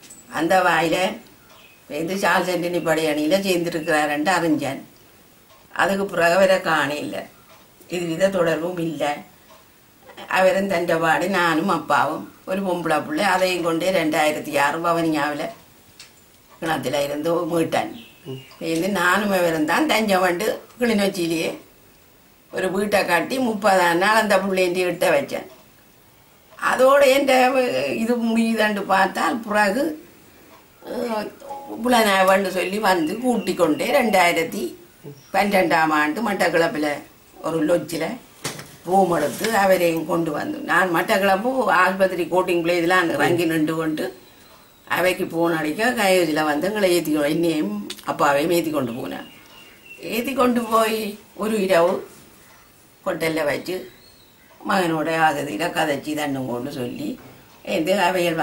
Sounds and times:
Narration, monologue: 0.0s - 58.4s
Female speech, woman speaking: 0.3s - 1.2s, 1.9s - 4.9s, 5.7s - 7.3s, 7.9s - 9.3s, 10.1s - 15.6s, 16.6s - 18.0s, 18.6s - 21.7s, 22.5s - 25.5s, 26.6s - 30.0s, 30.8s - 38.2s, 38.9s - 44.2s, 44.9s - 49.3s, 50.0s - 52.2s, 53.1s - 54.0s, 54.6s - 58.4s.

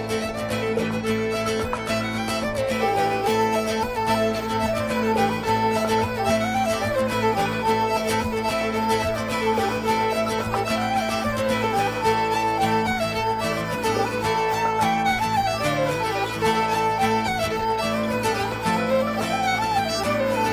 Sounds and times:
Music: 0.0s - 20.5s.

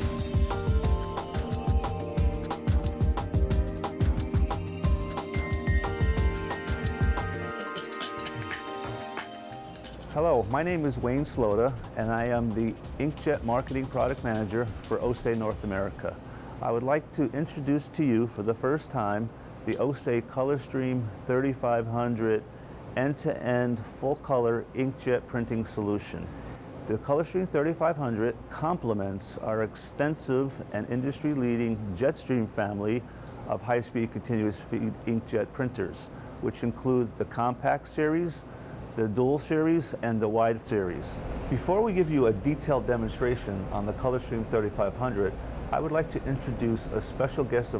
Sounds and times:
Speech: 10.1s - 38.4s, 39.0s - 47.7s.

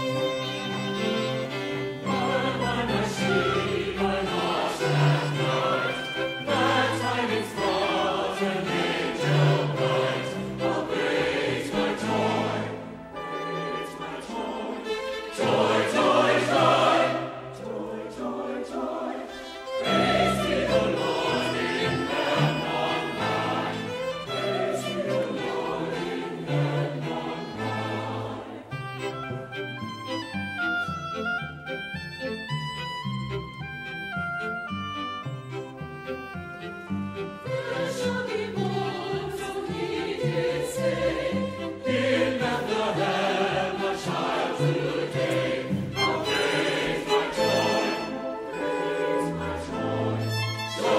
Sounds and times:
Music: 0.0s - 50.9s.

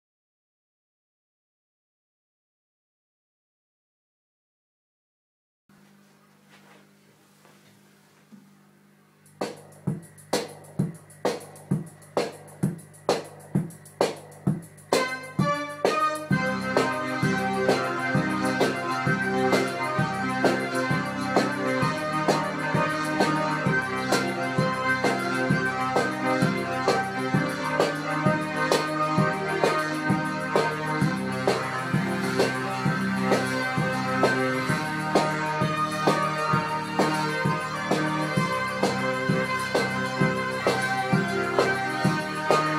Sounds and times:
Drum machine: 9.2s - 42.7s.

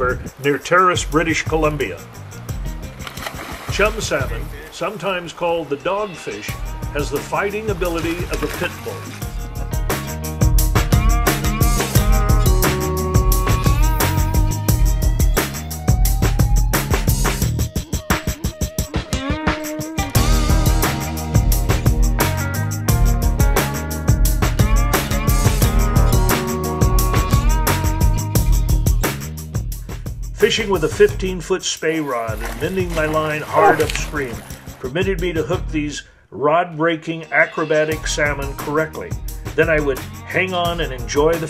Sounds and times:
Speech: 0.0s - 2.1s, 3.7s - 9.2s, 30.4s - 41.5s
Music: 0.0s - 36.0s, 37.0s - 41.5s.

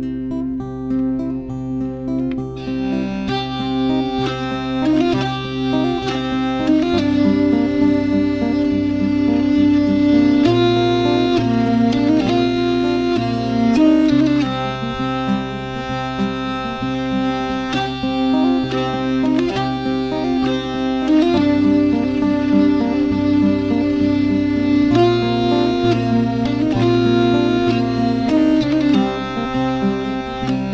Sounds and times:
Acoustic guitar: 0.0s - 30.7s
Strum: 0.0s - 30.7s.

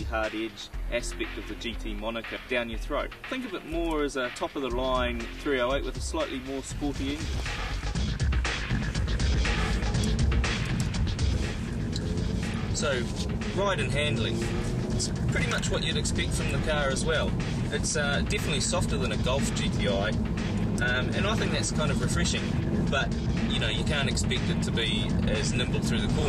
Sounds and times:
Speech: 0.0s - 7.3s, 12.8s - 14.5s, 15.3s - 20.2s, 20.8s - 26.2s
Music: 0.0s - 26.2s.

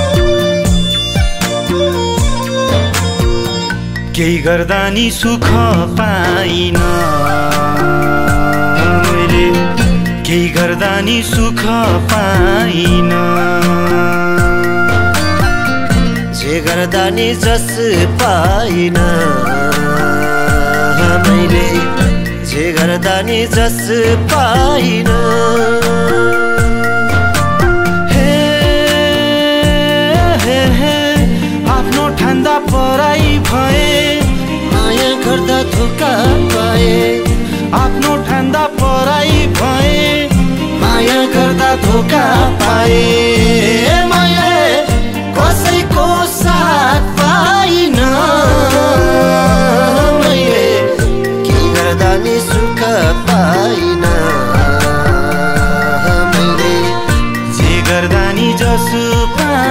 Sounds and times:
Music: 0.0s - 59.7s.

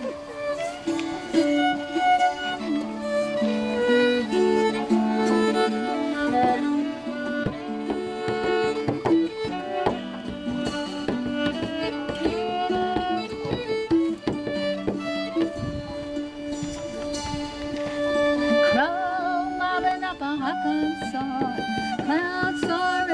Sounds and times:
Violin, fiddle: 0.0s - 23.1s.

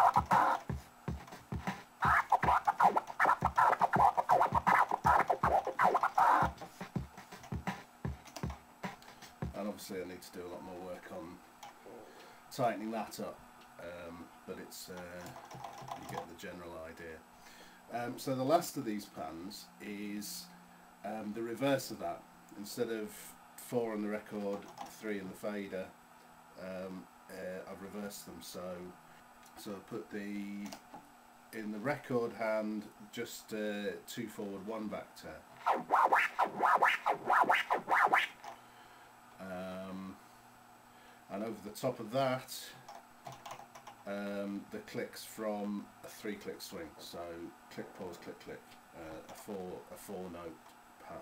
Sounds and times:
Scratching (performance technique): 0.0s - 9.6s, 35.6s - 38.5s
Speech: 9.5s - 15.4s, 16.0s - 17.2s, 17.9s - 26.0s, 26.6s - 30.8s, 31.5s - 35.4s, 39.4s - 40.2s, 41.3s - 42.9s, 44.1s - 51.2s.

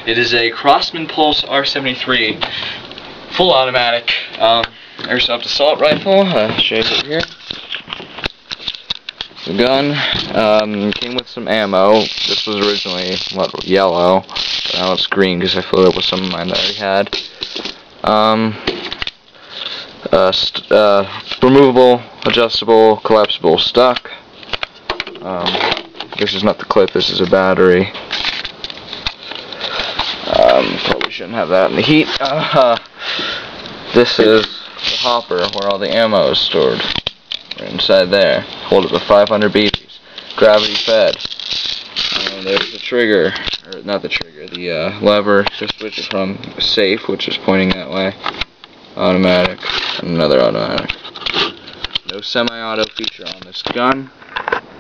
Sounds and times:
Speech: 0.0s - 2.4s, 3.3s - 7.4s, 9.5s - 17.2s, 18.0s - 18.6s, 20.0s - 24.2s, 25.2s - 25.6s, 26.2s - 28.0s, 30.3s - 32.8s, 33.9s - 36.9s, 37.6s - 41.2s, 42.2s - 48.2s, 49.0s - 50.9s, 52.1s - 54.1s.

